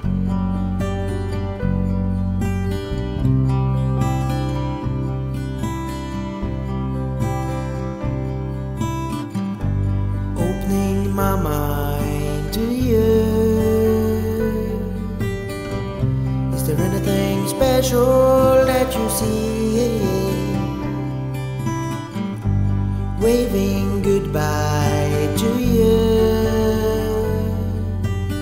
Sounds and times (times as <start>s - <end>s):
Sad music: 0.0s - 28.4s
Soul music: 0.0s - 28.4s.